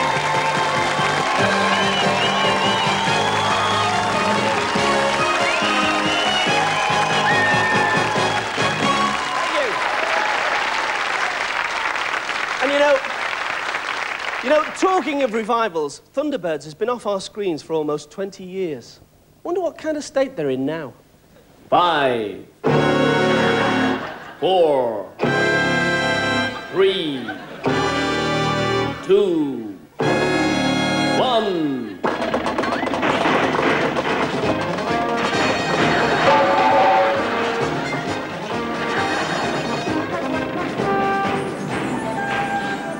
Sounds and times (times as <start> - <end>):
Music: 0.0 - 9.7, 22.6 - 24.2, 25.2 - 29.4, 30.0 - 42.9
Speech: 12.6 - 13.1, 14.4 - 21.0, 26.7 - 27.4, 29.0 - 29.8, 31.2 - 32.0.